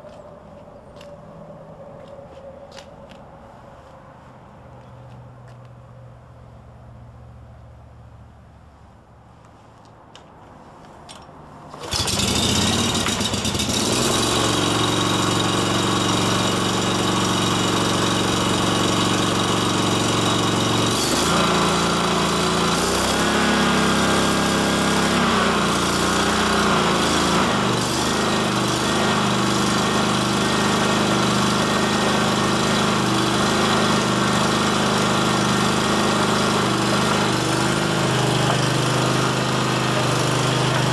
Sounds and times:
Lawn mower: 11.7s - 40.9s
Engine knocking: 11.9s - 21.5s.

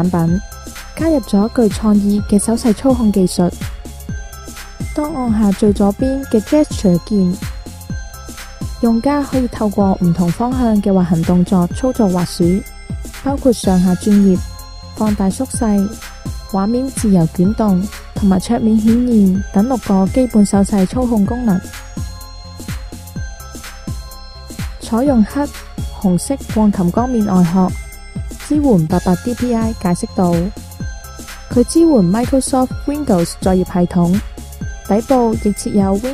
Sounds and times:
Speech: 0.0s - 0.4s, 1.0s - 3.6s, 5.0s - 7.4s, 8.8s - 12.6s, 13.3s - 14.4s, 15.0s - 21.6s, 24.8s - 27.8s, 28.4s - 30.5s, 31.5s - 34.2s, 34.9s - 36.1s
Music: 0.0s - 36.1s.

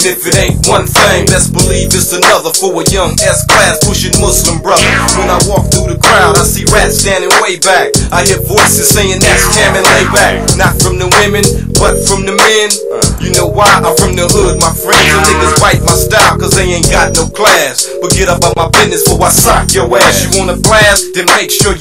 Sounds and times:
Music: 0.0s - 21.8s
Singing: 0.0s - 21.8s.

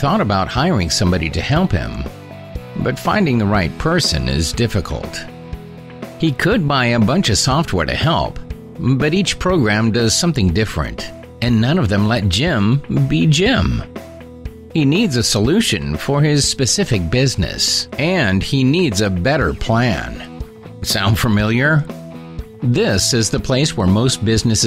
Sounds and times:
Speech: 0.0s - 2.1s, 2.8s - 5.3s, 6.2s - 13.9s, 14.8s - 21.9s, 22.6s - 24.6s
Music: 0.0s - 24.6s.

